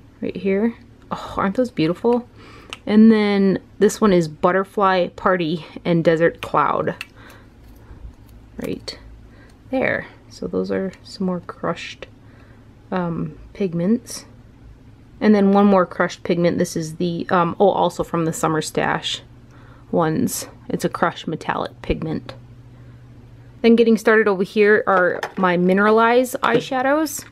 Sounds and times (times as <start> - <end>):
Inside, small room: 0.0 - 27.3
Speech: 0.2 - 7.0, 8.6 - 9.1, 9.7 - 12.1, 12.9 - 14.3, 15.2 - 19.3, 19.9 - 22.4, 23.6 - 27.3.